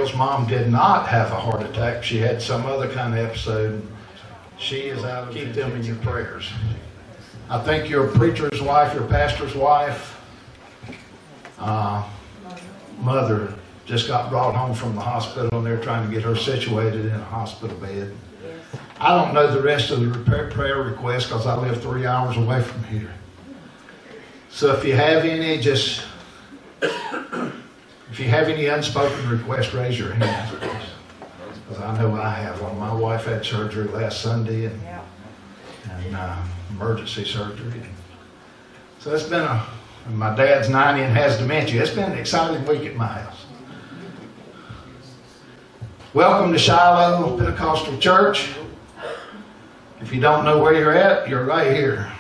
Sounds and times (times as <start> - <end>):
Speech: 0.0 - 10.2, 11.6 - 23.6, 24.5 - 26.3, 28.1 - 38.1, 39.0 - 44.2, 46.1 - 48.8, 50.0 - 52.2.